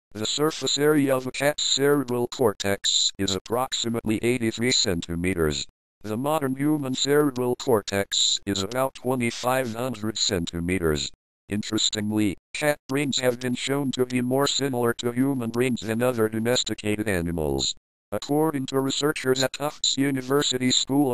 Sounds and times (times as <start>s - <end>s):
Speech: 0.1s - 21.1s.